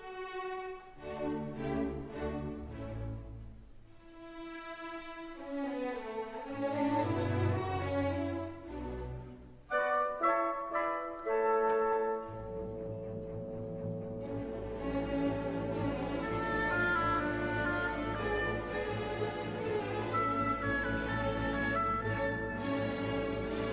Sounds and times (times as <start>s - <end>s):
Violin, fiddle: 0.0s - 9.6s, 11.4s - 23.7s.